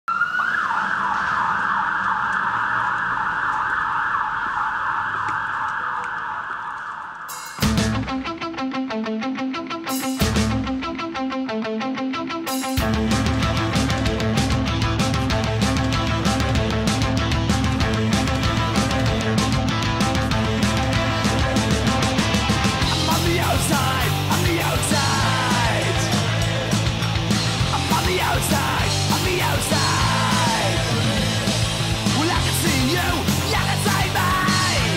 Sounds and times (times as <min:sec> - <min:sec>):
Fire engine, fire truck (siren): 0:00.0 - 0:07.5
Outside, urban or manmade: 0:00.0 - 0:34.9
Music: 0:07.3 - 0:34.9.